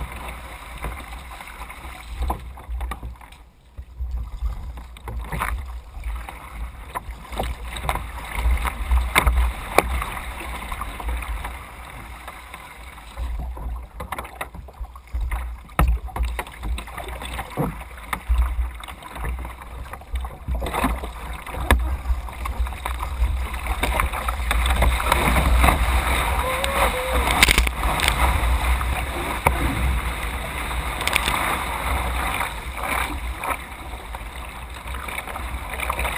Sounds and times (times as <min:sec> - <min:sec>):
Waves, surf: 0:00.0 - 0:36.1.